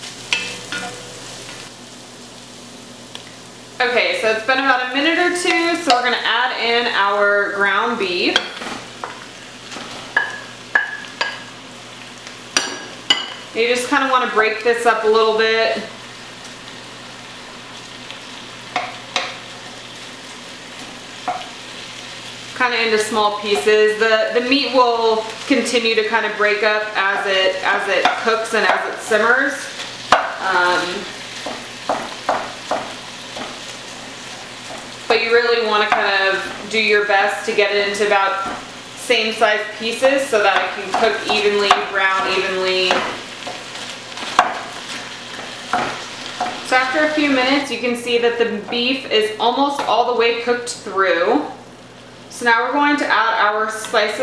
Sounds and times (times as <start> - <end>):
Sizzle: 0.0 - 54.2.